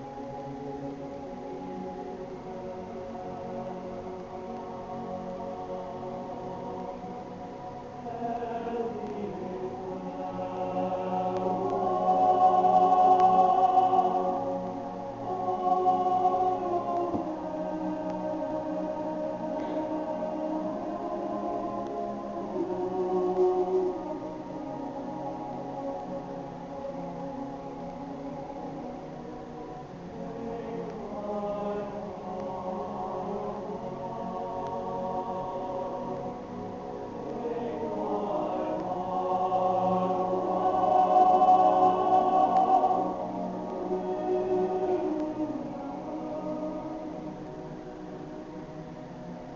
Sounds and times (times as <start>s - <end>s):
Choir: 0.0s - 49.5s.